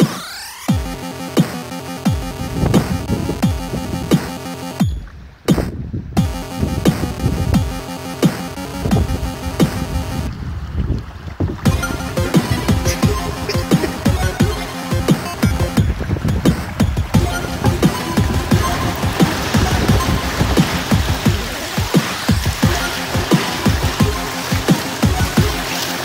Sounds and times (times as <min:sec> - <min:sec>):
Waves, surf: 0:09.9 - 0:26.0.